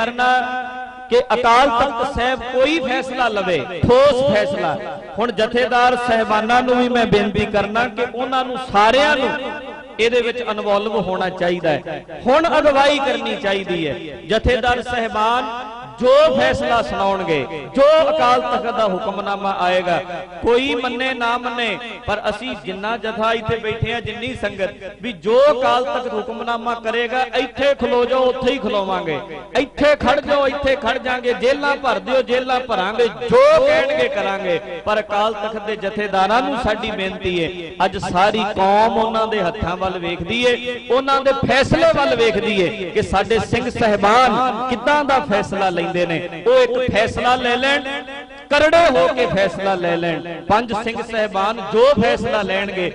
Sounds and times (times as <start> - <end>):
Speech: 0.0 - 52.9.